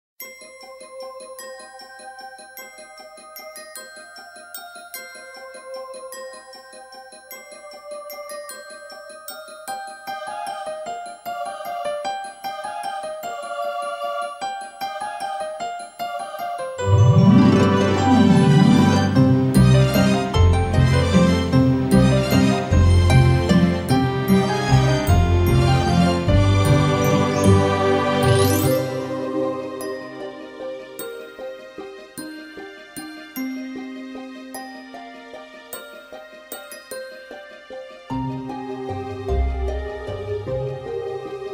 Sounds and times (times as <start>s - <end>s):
Glockenspiel: 0.2s - 41.5s.